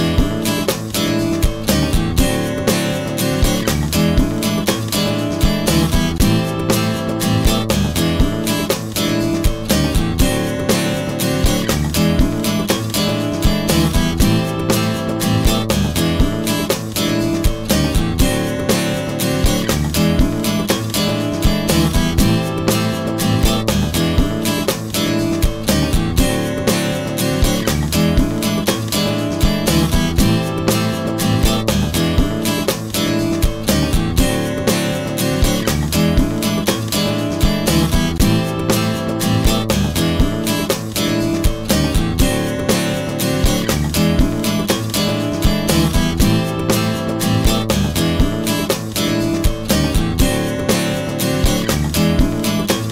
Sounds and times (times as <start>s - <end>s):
Music: 0.0s - 52.9s.